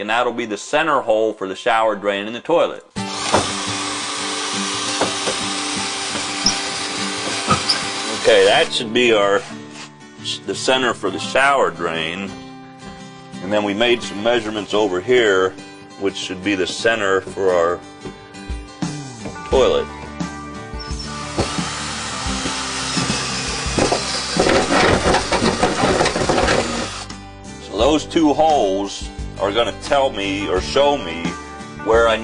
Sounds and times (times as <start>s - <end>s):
Speech: 0.0s - 2.9s, 8.2s - 9.5s, 10.2s - 12.3s, 13.4s - 17.8s, 19.5s - 19.9s, 27.6s - 32.2s
Music: 1.8s - 32.2s.